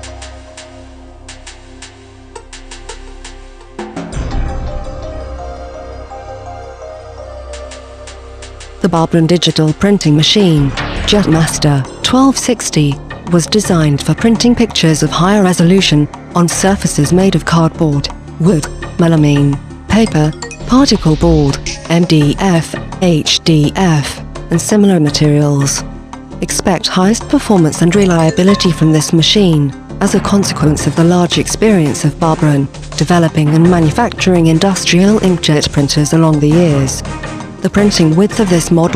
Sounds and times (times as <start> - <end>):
Music: 0.0 - 38.9
Speech: 8.8 - 25.8, 26.4 - 37.0, 37.6 - 38.9.